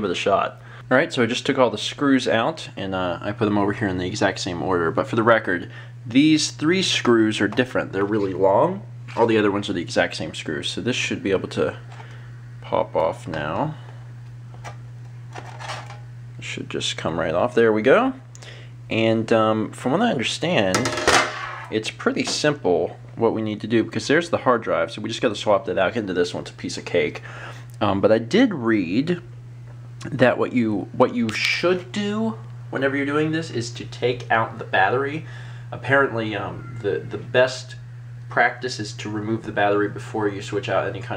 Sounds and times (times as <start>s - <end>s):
Speech: 0.0s - 11.8s, 12.6s - 13.9s, 16.4s - 18.2s, 18.9s - 20.9s, 21.7s - 27.2s, 27.8s - 29.3s, 30.0s - 41.1s.